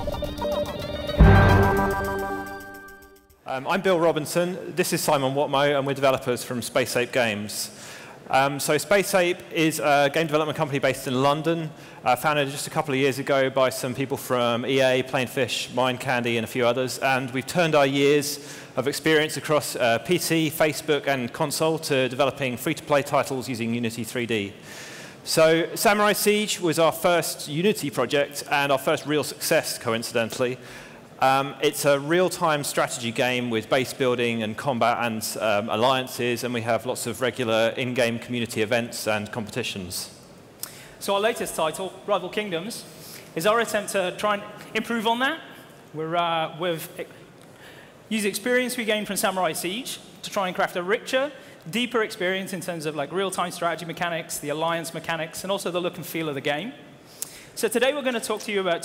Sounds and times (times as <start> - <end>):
Speech: 3.5 - 24.6, 25.2 - 30.6, 31.2 - 40.2, 41.0 - 47.2, 48.1 - 56.8, 57.6 - 58.8.